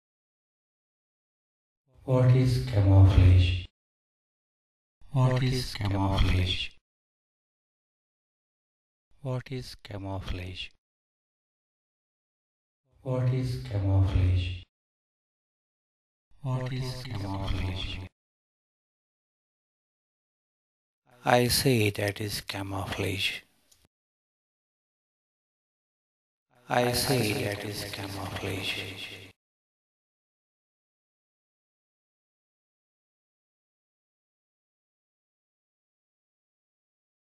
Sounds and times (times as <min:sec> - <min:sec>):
Speech: 0:02.0 - 0:03.7, 0:05.1 - 0:06.8, 0:09.2 - 0:10.8, 0:13.0 - 0:14.7, 0:16.4 - 0:18.1, 0:21.2 - 0:23.5, 0:26.6 - 0:29.4.